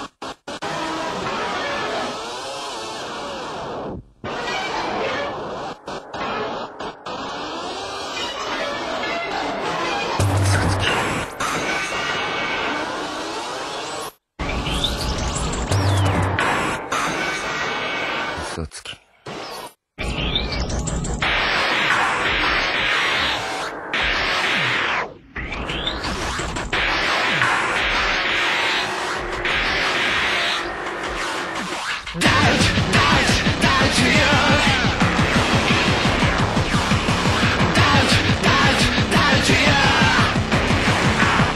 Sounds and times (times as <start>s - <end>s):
Music: 0.0s - 18.4s, 20.0s - 41.5s.